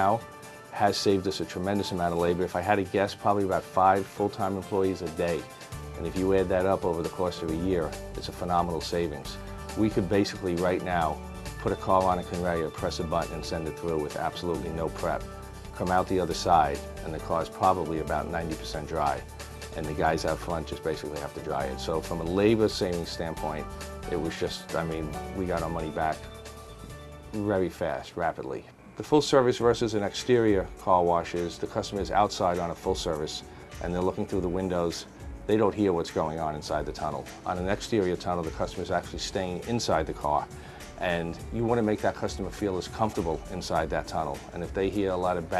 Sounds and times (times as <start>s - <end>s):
Speech: 0.0s - 15.2s, 15.8s - 26.3s, 27.3s - 45.5s
Music: 0.0s - 45.5s.